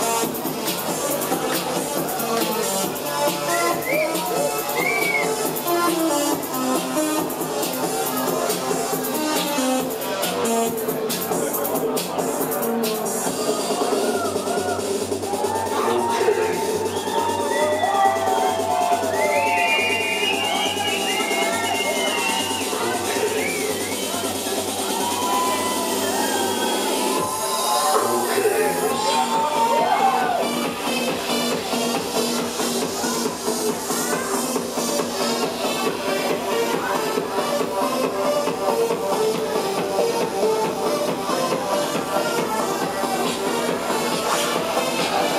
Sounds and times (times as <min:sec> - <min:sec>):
Music: 0:00.0 - 0:45.3
Speech: 0:15.6 - 0:16.8, 0:22.2 - 0:24.6, 0:27.8 - 0:30.4.